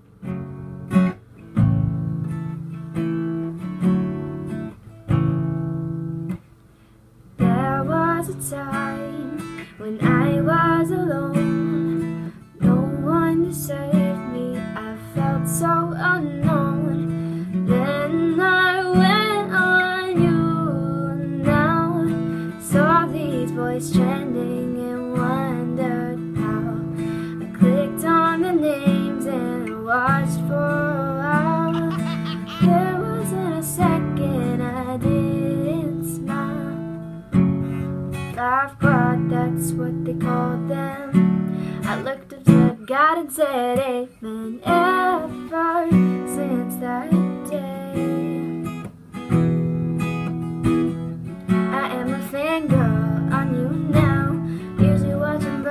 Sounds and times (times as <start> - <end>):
Music: 0.0 - 55.7.